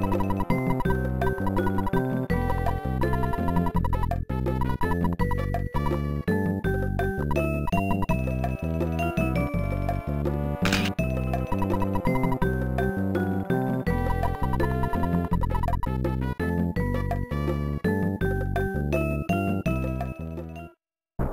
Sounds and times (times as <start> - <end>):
Music: 0.0 - 21.3.